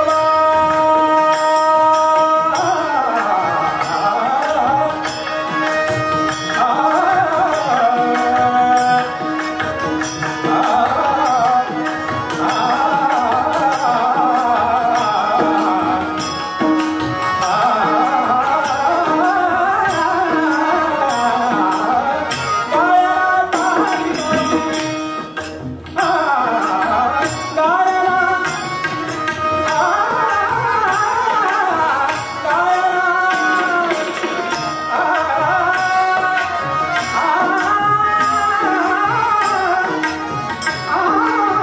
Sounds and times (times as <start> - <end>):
Carnatic music: 0.0 - 41.6
Sitar: 0.0 - 41.6.